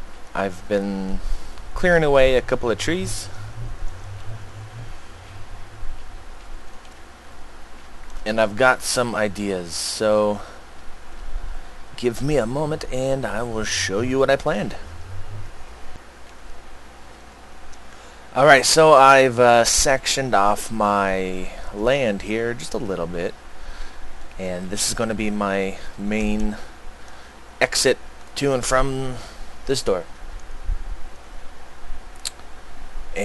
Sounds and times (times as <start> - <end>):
Speech: 0.4 - 1.2, 1.8 - 5.4, 8.3 - 10.5, 12.0 - 14.9, 18.4 - 23.4, 24.4 - 26.7, 27.6 - 30.1.